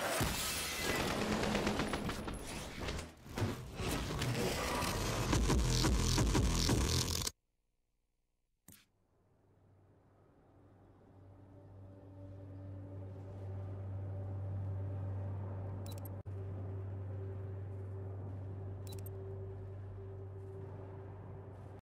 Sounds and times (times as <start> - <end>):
Music: 10.8 - 21.8.